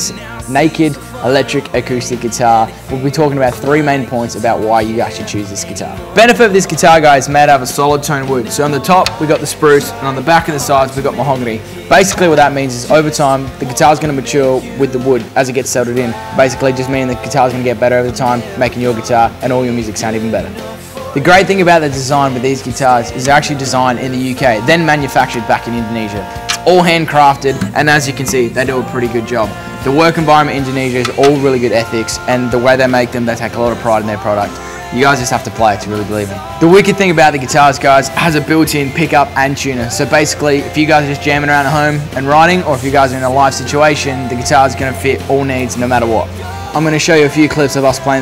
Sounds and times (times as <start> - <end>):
Speech: 0.0 - 48.2.